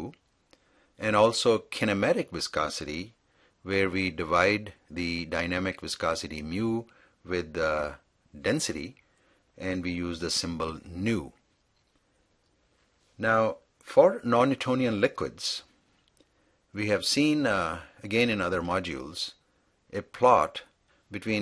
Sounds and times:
Speech: 0.0s - 0.2s, 1.0s - 9.0s, 9.6s - 11.4s, 13.2s - 15.7s, 16.8s - 21.4s.

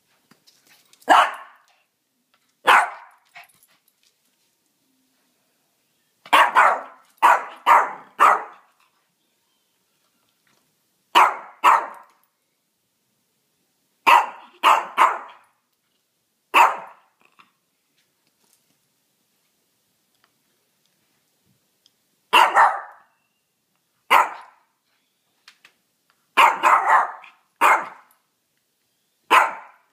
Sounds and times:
Bark: 1.1s - 1.6s, 2.7s - 3.2s, 6.3s - 8.7s, 11.2s - 12.1s, 14.1s - 15.4s, 16.6s - 17.1s, 22.3s - 23.1s, 24.1s - 24.7s, 26.4s - 28.1s, 29.3s - 29.9s.

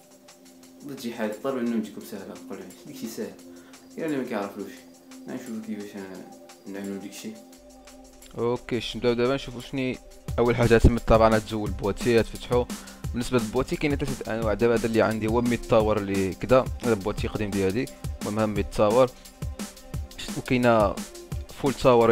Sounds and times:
Music: 0.0s - 22.1s
Speech: 0.8s - 3.4s, 4.0s - 7.4s, 8.3s - 19.1s, 20.2s - 22.1s.

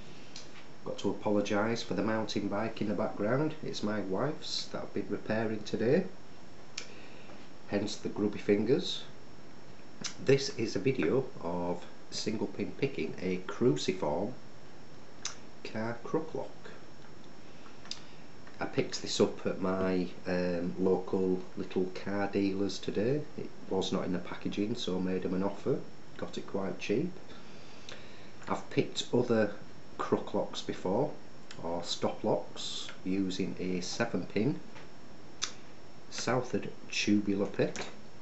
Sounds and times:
Speech: 0.8s - 6.2s, 7.7s - 9.2s, 10.0s - 14.4s, 15.6s - 16.8s, 18.6s - 27.2s, 28.5s - 34.7s, 36.1s - 38.0s.

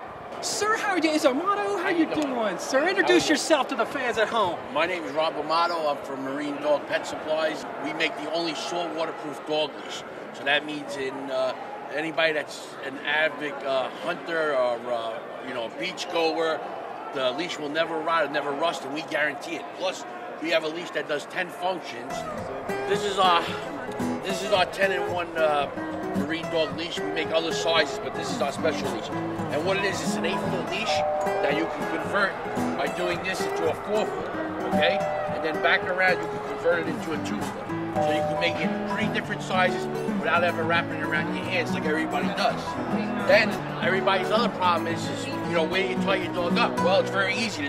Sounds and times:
Speech: 0.4s - 16.6s, 17.2s - 22.2s, 22.9s - 23.6s, 24.2s - 47.6s
Music: 22.1s - 47.6s.

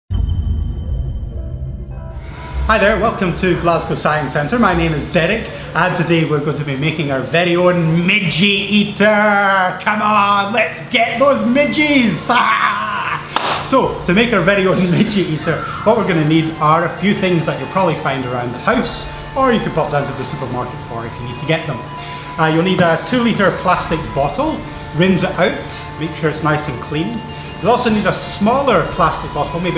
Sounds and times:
Music: 0.1s - 29.7s
Speech: 2.7s - 29.7s.

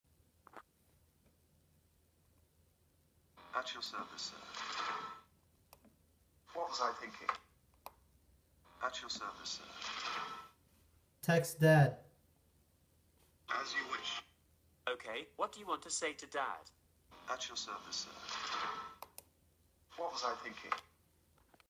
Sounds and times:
Speech: 3.5s - 4.4s, 6.5s - 7.4s, 8.8s - 9.7s, 11.2s - 12.1s, 14.9s - 18.2s, 19.9s - 20.9s.

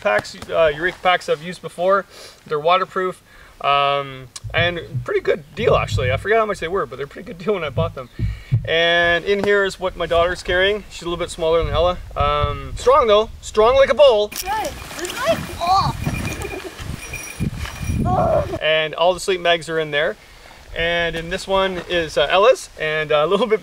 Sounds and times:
Speech: 0.0s - 8.1s, 8.7s - 16.0s, 18.1s - 20.2s, 20.8s - 23.6s.

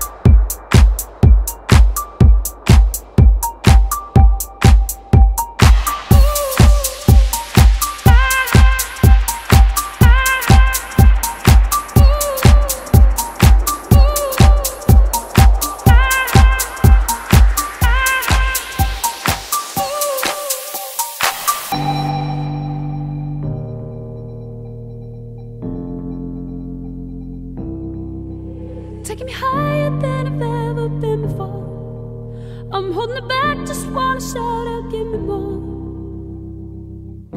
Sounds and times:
Ambient music: 0.0s - 32.4s.

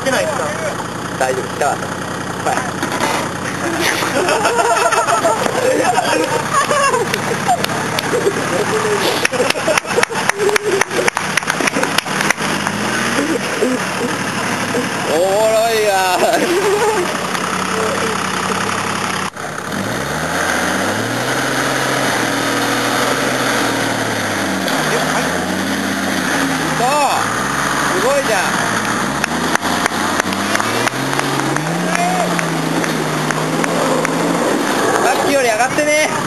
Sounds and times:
Car: 0.0s - 36.2s
Truck: 0.0s - 36.2s.

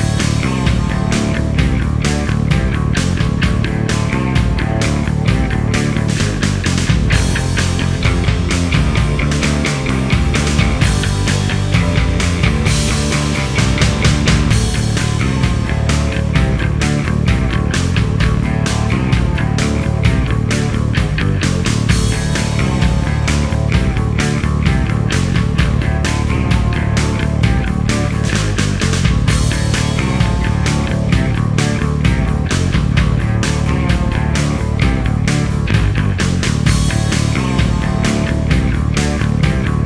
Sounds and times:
Grunge: 0.0s - 39.8s.

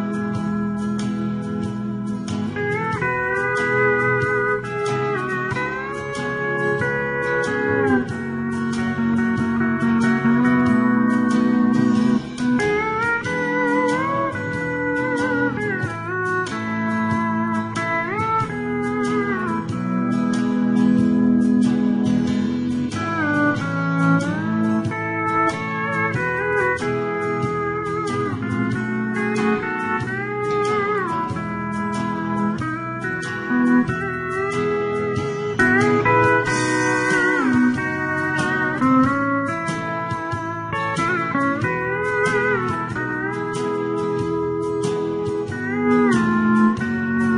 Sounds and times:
Steel guitar, slide guitar: 0.0s - 47.3s.

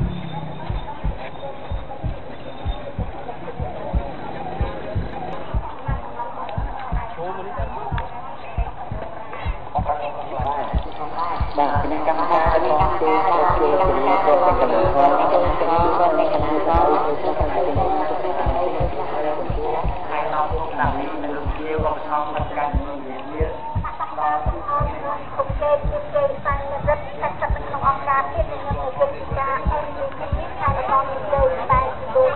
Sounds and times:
Speech: 0.0s - 32.3s.

